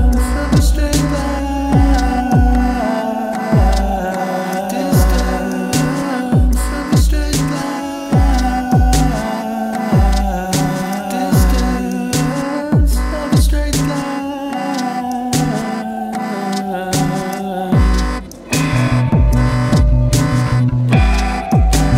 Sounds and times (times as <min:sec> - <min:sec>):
Humming: 0:00.0 - 0:21.9.